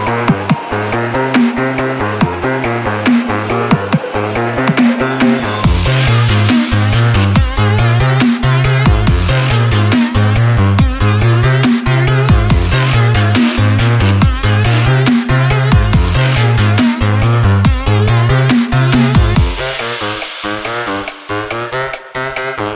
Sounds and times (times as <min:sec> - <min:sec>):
Dubstep: 0:00.0 - 0:22.7.